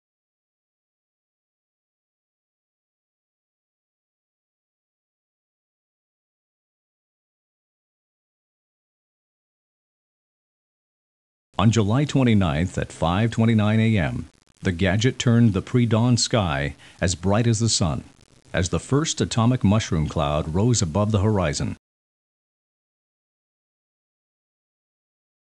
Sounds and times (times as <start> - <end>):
Speech: 11.6 - 21.8.